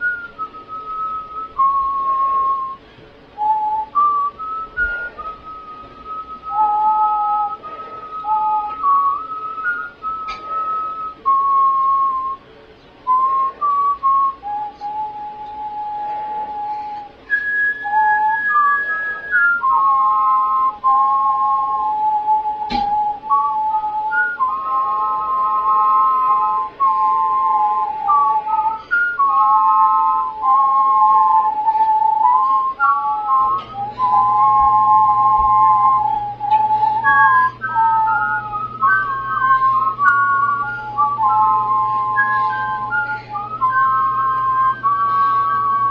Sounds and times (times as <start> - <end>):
Whistling: 0.0 - 45.9.